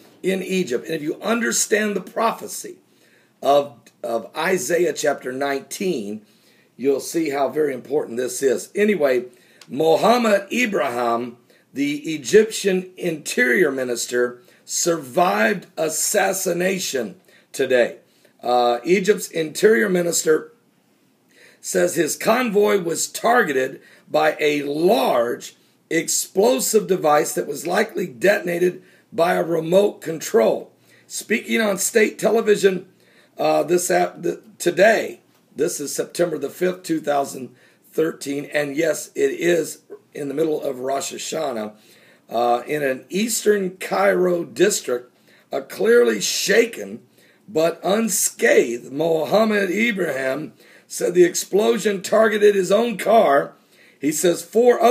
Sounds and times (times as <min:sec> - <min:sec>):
Speech: 0:00.2 - 0:02.8, 0:03.4 - 0:06.2, 0:06.8 - 0:20.6, 0:21.6 - 0:54.9.